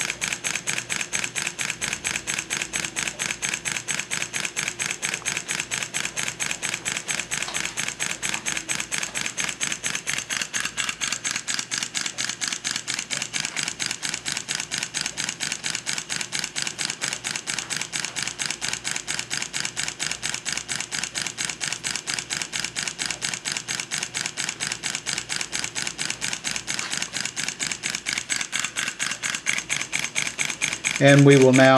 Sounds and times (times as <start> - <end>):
Engine: 0.0 - 31.7.